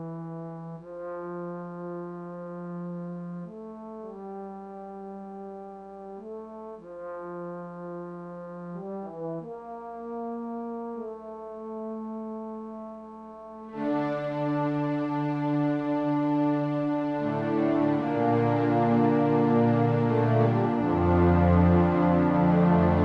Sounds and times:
Piano: 0:00.0 - 0:23.0.

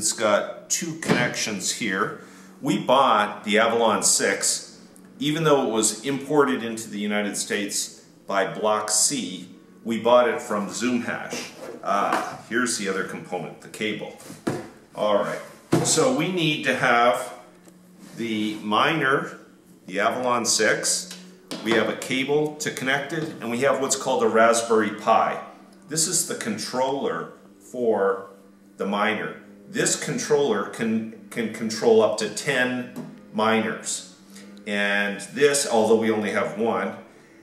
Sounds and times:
Speech: 0:00.0 - 0:14.2, 0:15.0 - 0:17.4, 0:18.2 - 0:34.1, 0:34.7 - 0:37.0
Inside, small room: 0:00.0 - 0:37.4.

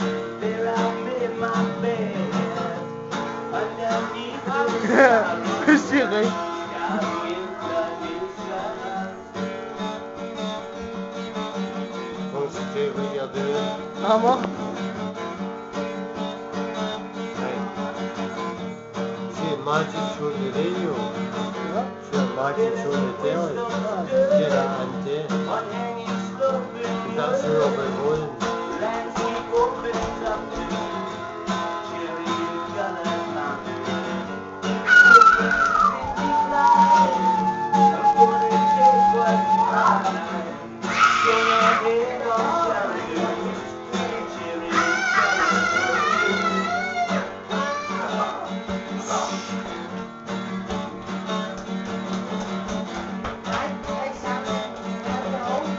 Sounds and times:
Strum: 0:00.0 - 0:41.0
Acoustic guitar: 0:00.0 - 0:55.7.

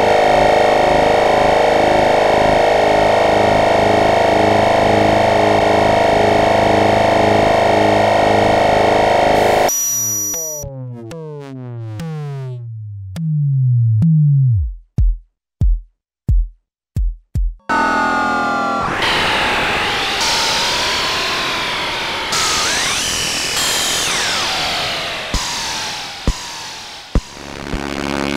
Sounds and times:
Synthesizer: 0:00.0 - 0:13.4, 0:17.6 - 0:28.3.

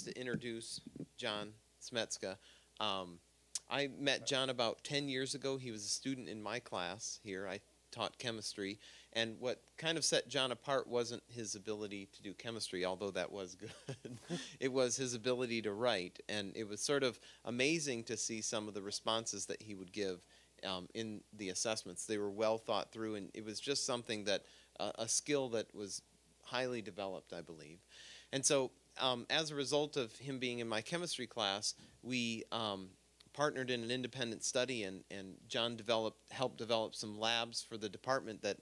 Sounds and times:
Speech: 0:00.0 - 0:38.6.

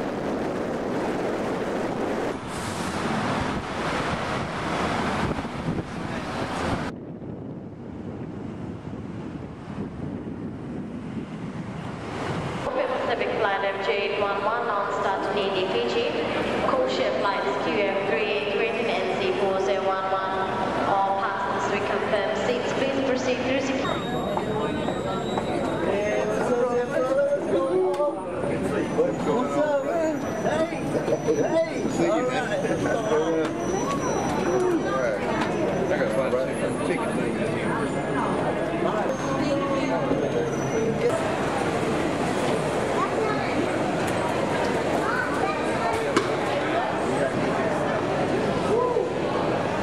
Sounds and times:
Speech: 0:12.7 - 0:41.4.

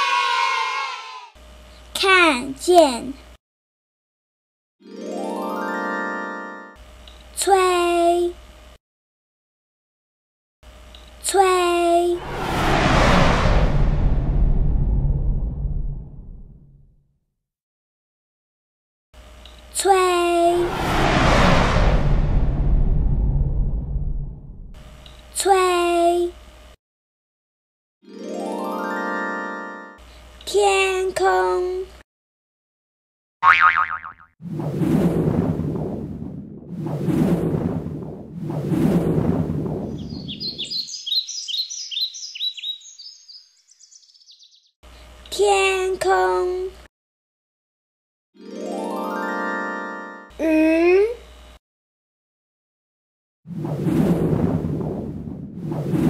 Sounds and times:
Speech: 0:01.9 - 0:03.3, 0:07.4 - 0:08.4, 0:11.2 - 0:12.2, 0:19.8 - 0:20.6, 0:25.4 - 0:26.4, 0:30.5 - 0:32.0, 0:45.3 - 0:46.9, 0:50.4 - 0:51.2.

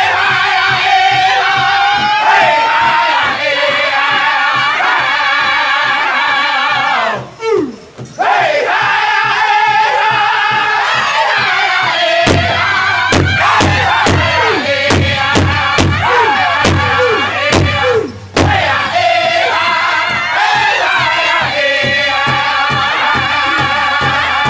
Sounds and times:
Male singing: 0:00.0 - 0:07.3, 0:08.3 - 0:24.4
Music: 0:00.0 - 0:24.4.

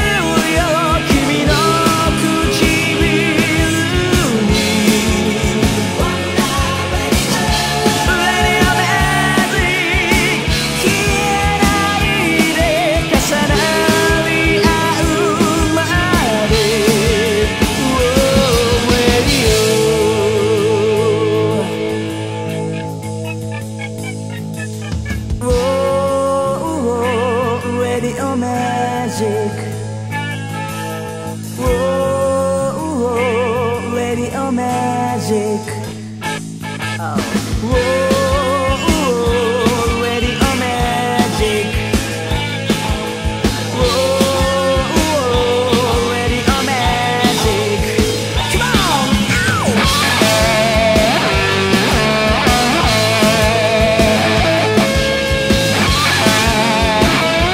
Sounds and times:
Music: 0:00.0 - 0:57.5.

